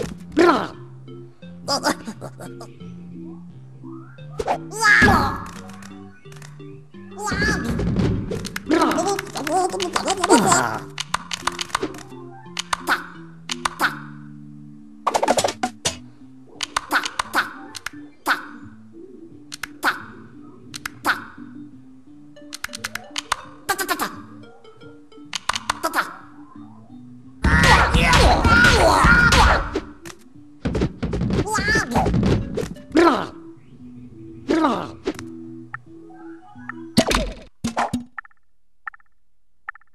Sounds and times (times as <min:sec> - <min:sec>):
Music: 0:00.0 - 0:37.4.